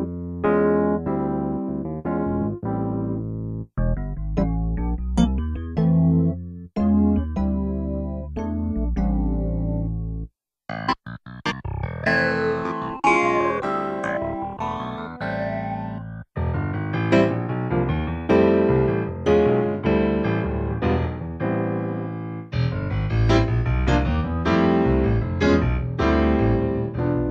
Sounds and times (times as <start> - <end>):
Music: 0.0 - 27.3
Sound effect: 10.7 - 16.1.